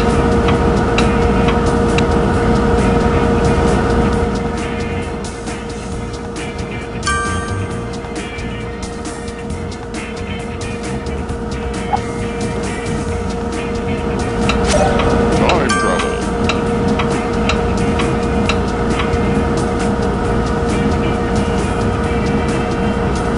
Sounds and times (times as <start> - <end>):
Music: 0.0 - 23.3.